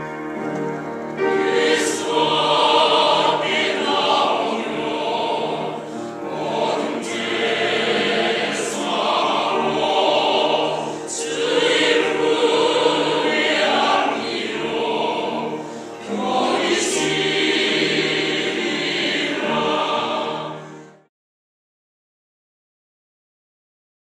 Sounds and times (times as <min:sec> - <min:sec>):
Gospel music: 0:00.0 - 0:21.1.